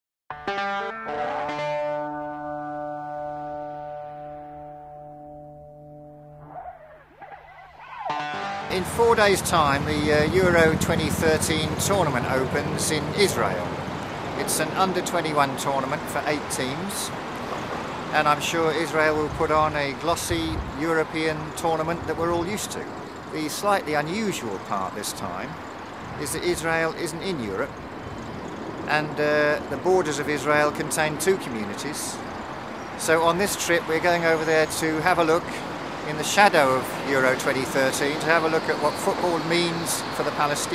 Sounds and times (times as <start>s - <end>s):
Music: 0.3s - 6.6s
Outside, urban or manmade: 0.3s - 40.7s
Speech: 8.7s - 13.7s, 14.4s - 17.2s, 18.1s - 25.6s, 26.2s - 27.7s, 28.9s - 32.2s, 33.0s - 40.7s.